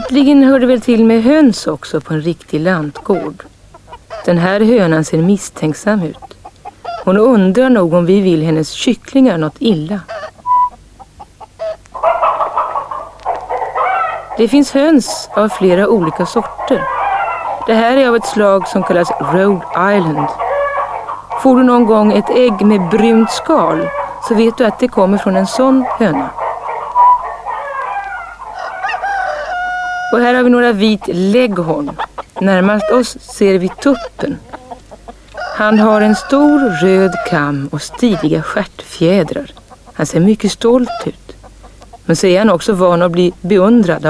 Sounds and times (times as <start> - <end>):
Chicken, rooster: 0.0 - 1.4, 2.6 - 7.5, 9.9 - 40.0, 40.6 - 42.1
Speech: 0.0 - 3.5, 4.3 - 6.2, 7.0 - 10.1, 14.4 - 16.9, 17.7 - 20.4, 21.4 - 26.4, 30.1 - 34.4, 35.5 - 41.4, 42.1 - 44.1.